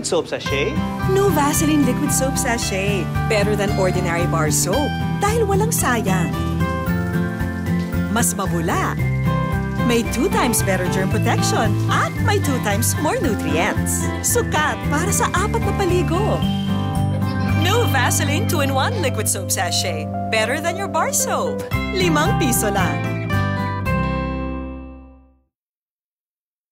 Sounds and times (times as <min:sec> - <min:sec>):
Music: 0:00.0 - 0:25.5.